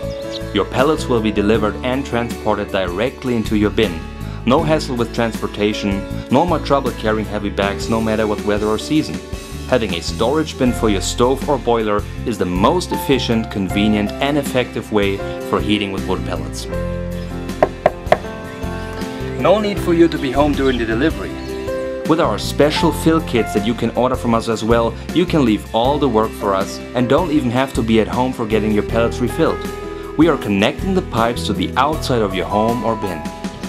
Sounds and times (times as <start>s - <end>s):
Music: 0.0s - 33.6s
Speech: 0.5s - 16.7s, 19.4s - 21.4s, 22.1s - 33.3s.